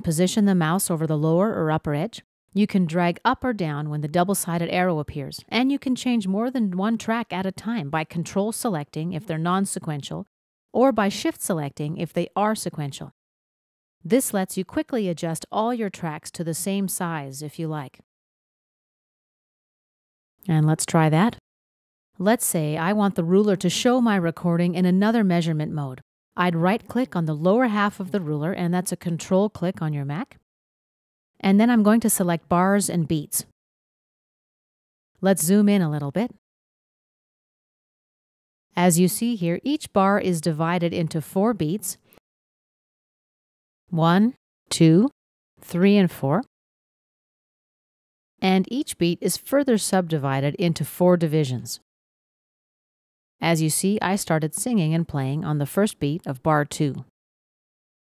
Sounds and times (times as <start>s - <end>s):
Speech: 0.0s - 13.2s, 14.1s - 18.0s, 20.4s - 21.4s, 22.2s - 30.4s, 31.4s - 33.5s, 35.2s - 36.4s, 38.8s - 42.0s, 44.0s - 46.5s, 48.4s - 51.8s, 53.4s - 57.1s.